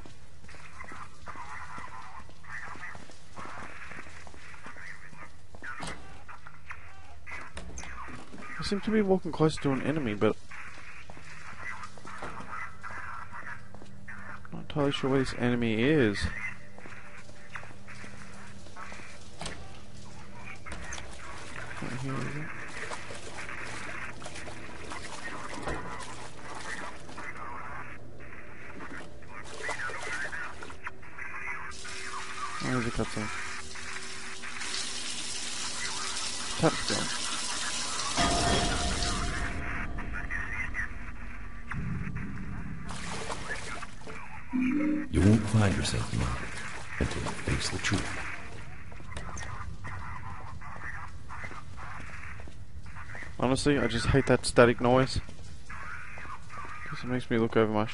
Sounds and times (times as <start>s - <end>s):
Water: 18.4s - 27.7s, 28.9s - 30.9s, 31.5s - 39.6s, 42.8s - 49.6s
Water tap, faucet: 31.8s - 38.2s
Sink (filling or washing): 33.7s - 38.2s.